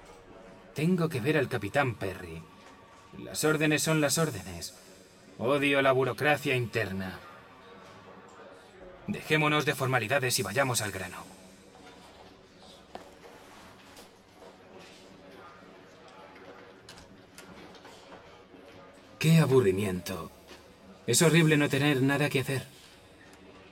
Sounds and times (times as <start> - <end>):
Speech: 0.1 - 2.5, 3.2 - 11.5, 18.2 - 22.8.